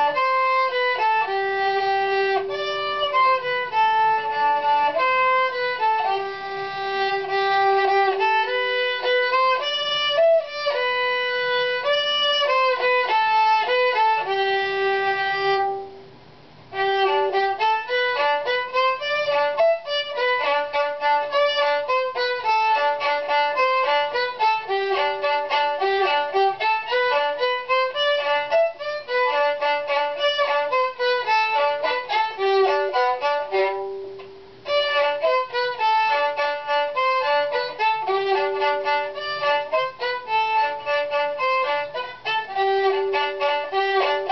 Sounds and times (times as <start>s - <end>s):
Violin, fiddle: 0.0s - 16.0s, 16.6s - 44.3s.